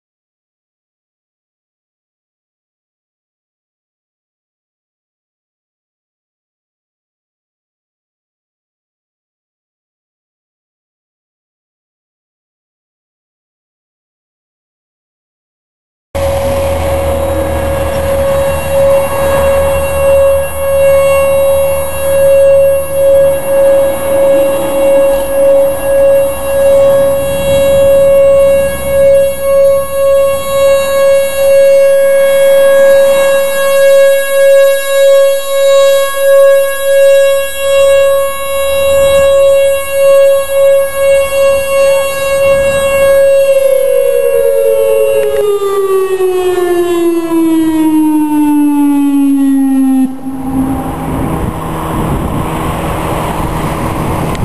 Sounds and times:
Car: 16.2 - 32.8, 50.1 - 54.4
Civil defense siren: 16.2 - 54.4.

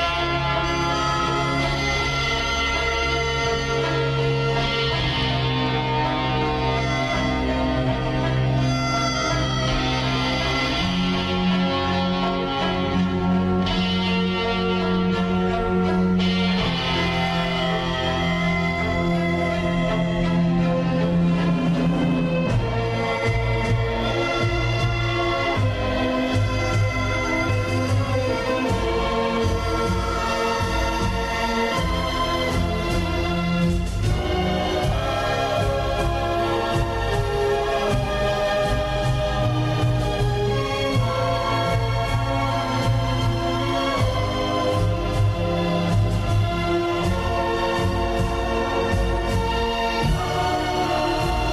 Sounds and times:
Music: 0.0 - 51.5.

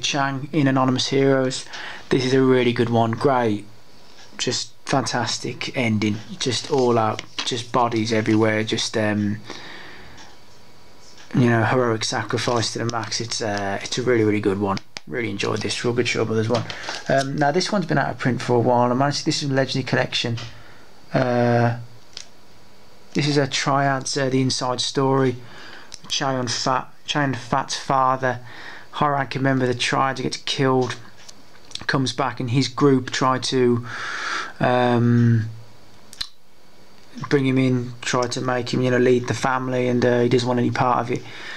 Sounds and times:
Speech: 0.0 - 3.8, 4.4 - 9.5, 11.2 - 21.9, 23.2 - 25.4, 26.0 - 31.1, 31.8 - 33.9, 34.6 - 35.6, 37.1 - 41.3
Inside, small room: 0.0 - 41.5.

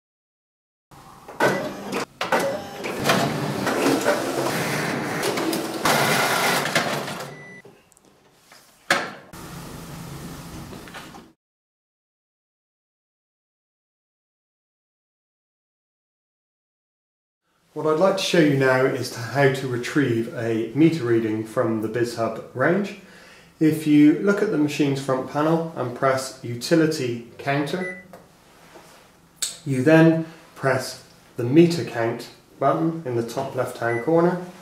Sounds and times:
Printer: 1.3 - 7.6.

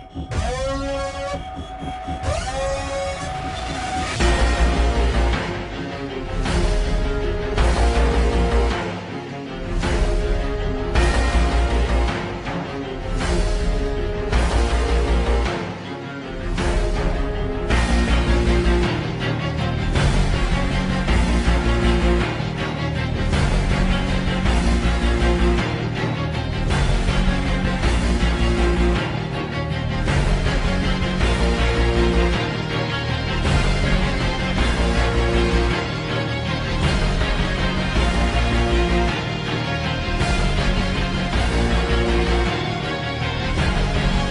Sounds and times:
Soundtrack music: 0.0 - 44.3
Theme music: 0.0 - 44.3.

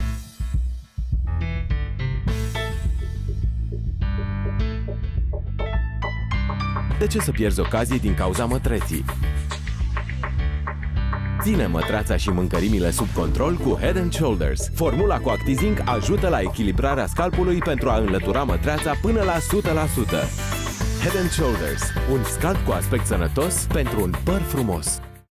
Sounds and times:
Music: 0.0 - 25.3
Speech: 7.0 - 9.1, 11.4 - 20.4, 21.0 - 25.0.

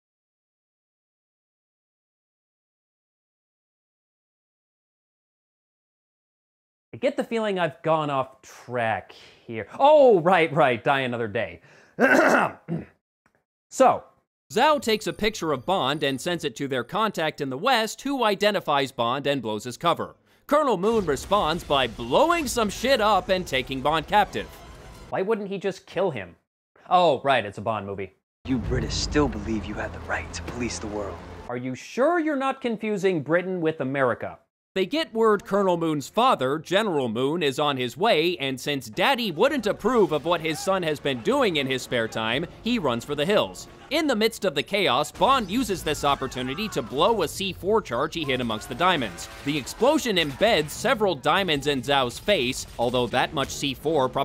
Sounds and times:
Speech: 7.0 - 11.6, 13.7 - 24.5, 25.2 - 54.2.

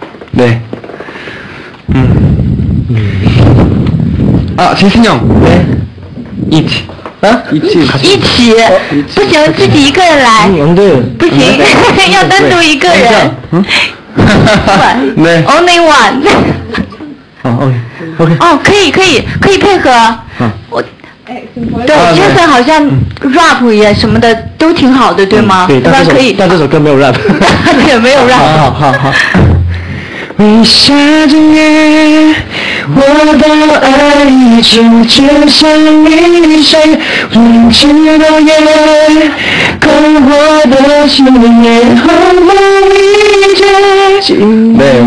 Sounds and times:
Male singing: 30.4 - 45.0.

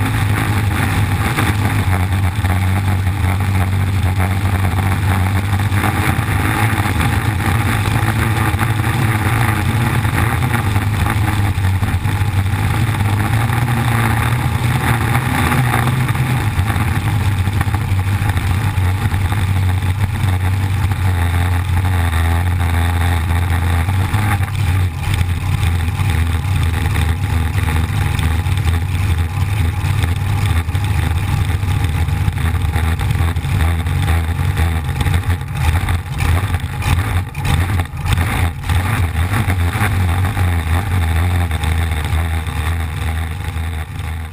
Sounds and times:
Vehicle: 0.0 - 44.3.

